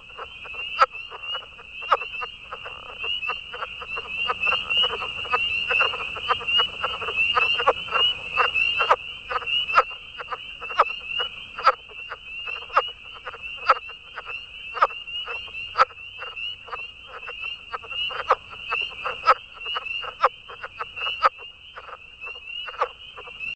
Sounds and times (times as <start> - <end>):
Frog: 0.0 - 23.5.